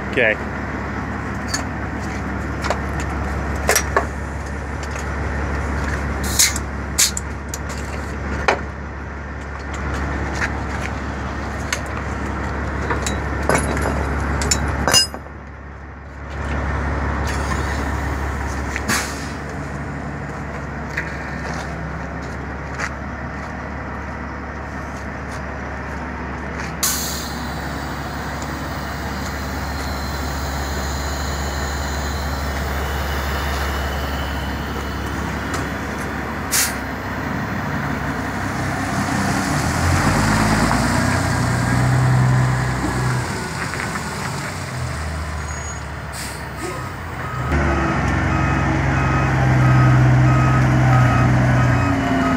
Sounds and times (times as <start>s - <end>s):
Truck: 0.0s - 52.3s.